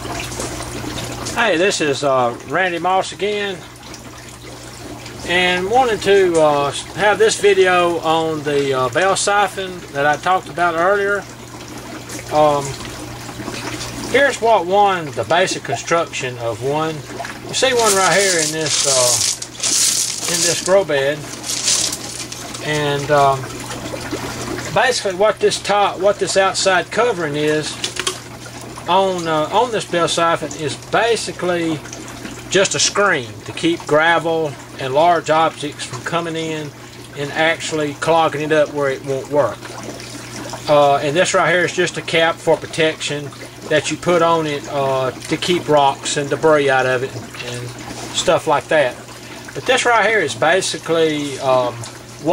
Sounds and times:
Speech: 1.4s - 3.7s, 5.2s - 11.3s, 12.3s - 12.8s, 14.1s - 19.3s, 20.2s - 21.8s, 22.6s - 23.5s, 24.7s - 27.8s, 28.9s - 31.9s, 32.5s - 39.6s, 40.7s - 49.0s, 49.6s - 52.3s.

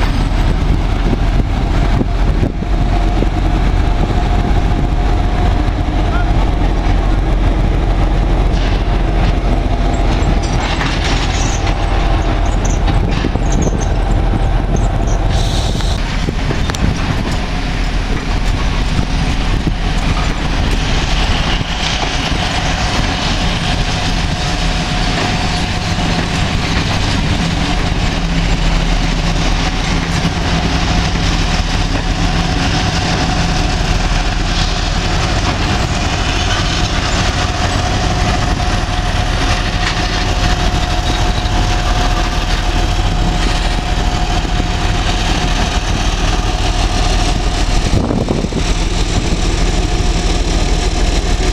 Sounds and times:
Railroad car, train wagon: 0.0s - 51.5s
Train: 0.0s - 51.5s.

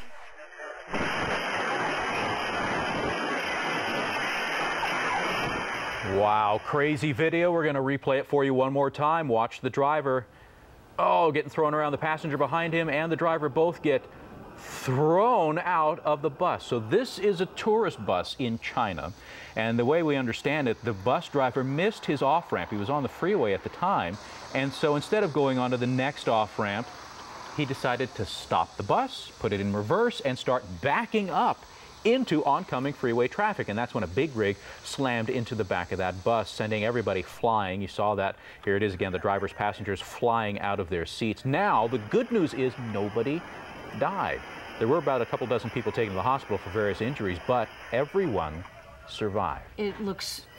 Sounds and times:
Speech: 6.1s - 10.3s, 11.0s - 14.1s, 14.8s - 26.9s, 27.6s - 43.4s, 44.0s - 50.5s.

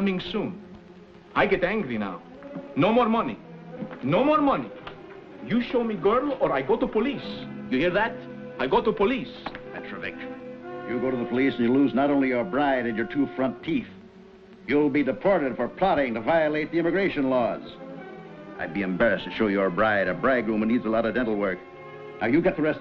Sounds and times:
Speech: 0.0s - 0.6s, 1.4s - 2.2s, 2.8s - 3.4s, 4.0s - 4.7s, 5.5s - 10.3s, 10.9s - 14.0s, 14.7s - 17.8s, 18.6s - 21.6s, 22.2s - 22.8s
Music: 0.0s - 22.8s.

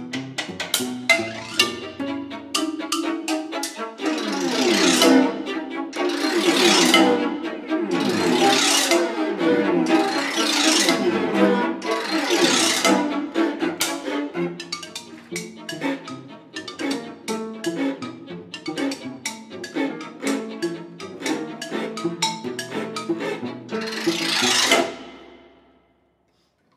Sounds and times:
Orchestra: 0.0s - 25.8s
Cello: 0.0s - 25.9s
Classical music: 0.0s - 25.9s
Marimba, xylophone: 0.5s - 9.0s, 12.4s - 25.1s
Violin, fiddle: 1.1s - 25.2s.

